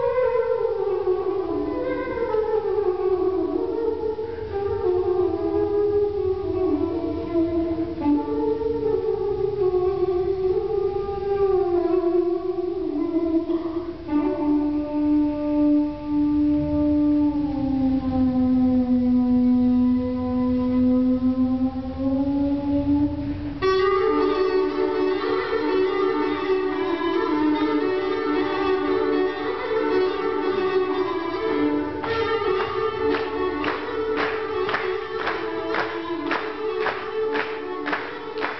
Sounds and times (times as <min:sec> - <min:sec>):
Inside, large room or hall: 0:00.0 - 0:38.6
Music: 0:00.0 - 0:38.6.